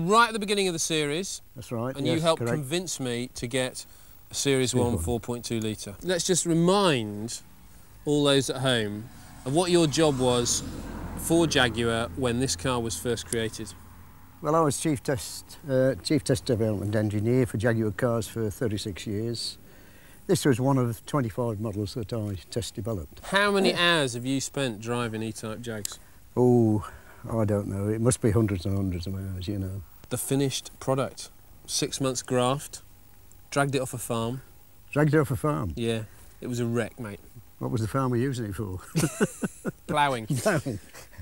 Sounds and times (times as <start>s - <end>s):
Speech: 0.0s - 7.4s, 8.1s - 10.6s, 11.3s - 13.8s, 14.4s - 19.6s, 20.3s - 32.8s, 33.5s - 38.9s, 39.9s - 40.8s.